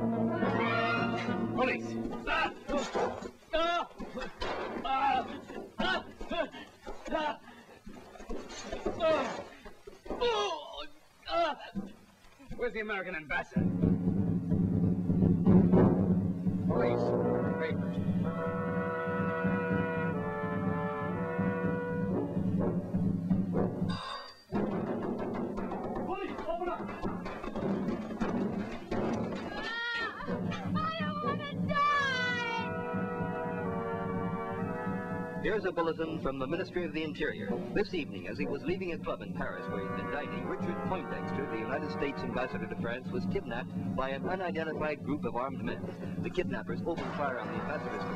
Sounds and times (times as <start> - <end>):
Music: 0.0 - 2.6, 13.5 - 48.1.